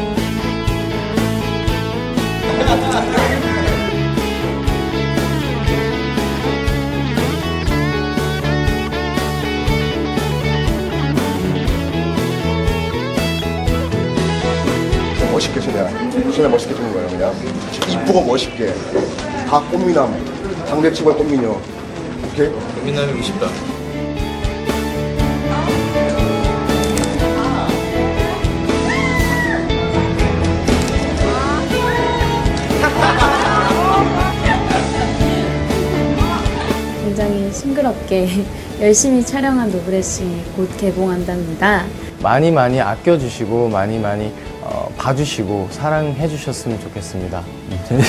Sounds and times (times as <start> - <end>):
Music: 0.0 - 48.0.